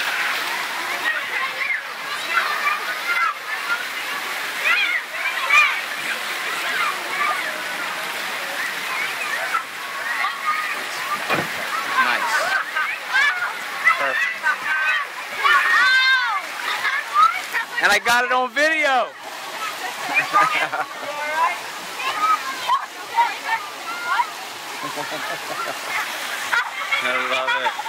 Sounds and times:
Water: 0.0s - 27.8s.

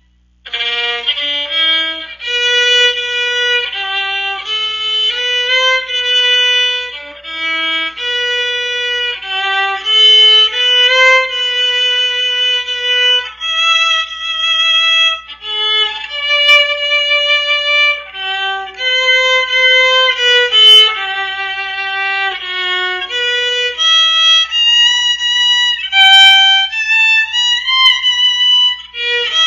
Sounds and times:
Violin, fiddle: 0.0s - 29.4s.

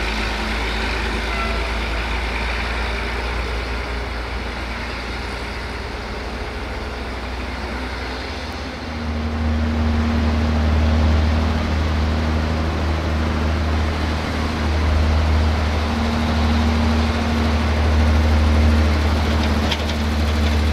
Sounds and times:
Truck: 0.0s - 20.7s.

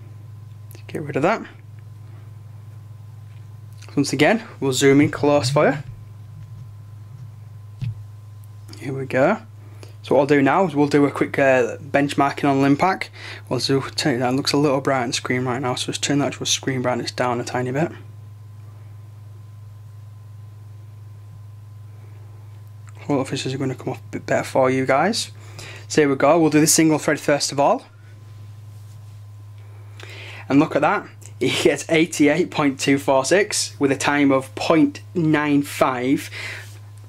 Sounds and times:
Inside, small room: 0.0s - 37.0s
Speech: 0.7s - 1.6s, 3.8s - 6.0s, 8.7s - 18.1s, 23.0s - 27.9s, 30.5s - 36.3s.

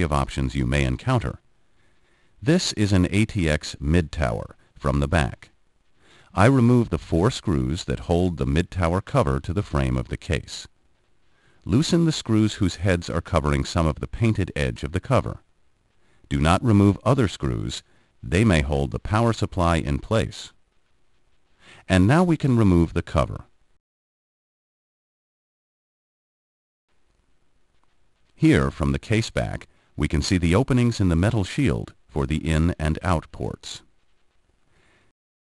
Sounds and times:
Speech: 0.0s - 1.4s, 2.4s - 5.6s, 6.3s - 10.8s, 11.6s - 15.5s, 16.3s - 20.6s, 21.8s - 23.5s, 28.4s - 33.9s.

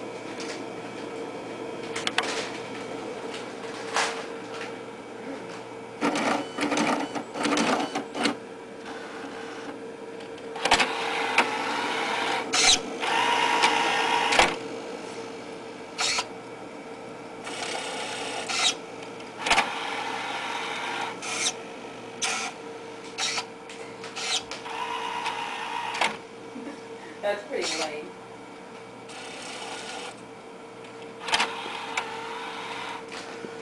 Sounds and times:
Printer: 1.8s - 4.8s, 5.6s - 16.4s, 17.4s - 26.3s, 27.6s - 28.0s, 28.8s - 33.6s.

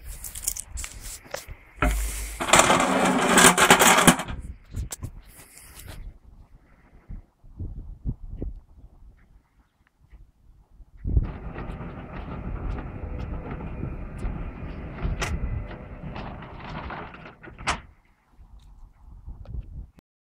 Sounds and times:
Sliding door: 1.8s - 4.3s, 11.2s - 17.9s.

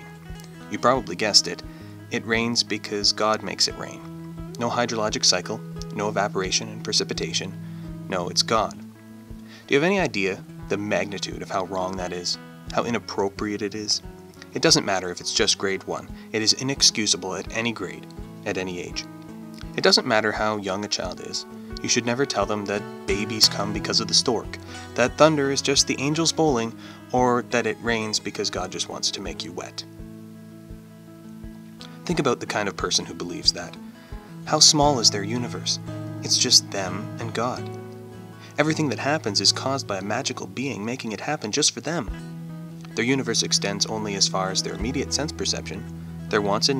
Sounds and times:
Music: 0.0s - 46.7s
Speech: 0.7s - 8.8s, 9.6s - 29.9s, 31.8s - 33.8s, 34.4s - 37.8s, 38.4s - 42.2s, 42.9s - 46.7s.

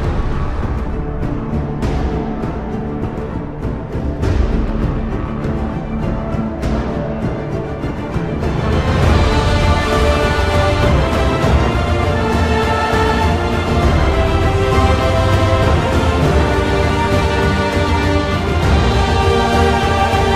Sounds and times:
Music: 0.0s - 20.3s.

